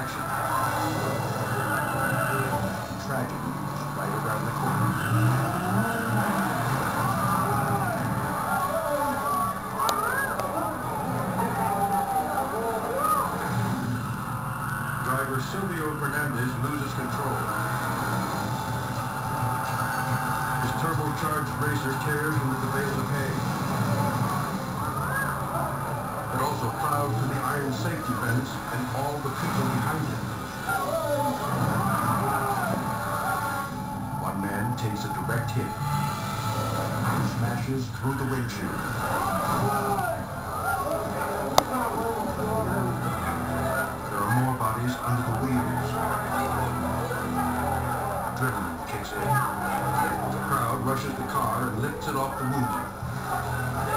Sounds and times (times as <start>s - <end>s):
Speech: 20.6s - 23.4s, 26.3s - 30.2s, 34.2s - 35.8s, 48.4s - 52.9s.